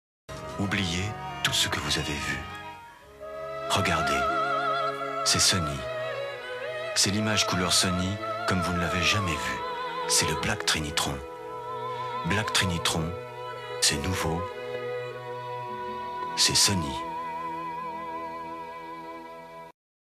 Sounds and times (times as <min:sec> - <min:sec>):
Music: 0:00.3 - 0:19.8
Speech: 0:00.6 - 0:02.5, 0:03.7 - 0:04.3, 0:05.3 - 0:05.9, 0:07.0 - 0:11.2, 0:12.2 - 0:13.2, 0:13.8 - 0:14.5, 0:16.4 - 0:17.1.